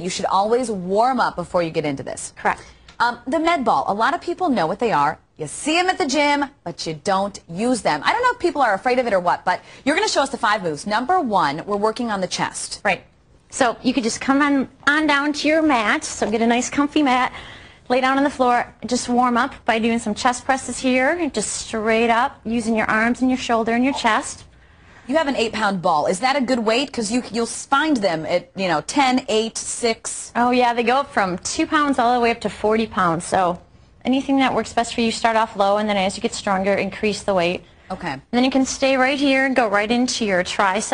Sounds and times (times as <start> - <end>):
Speech: 0.0 - 17.3, 17.9 - 24.4, 25.1 - 40.9.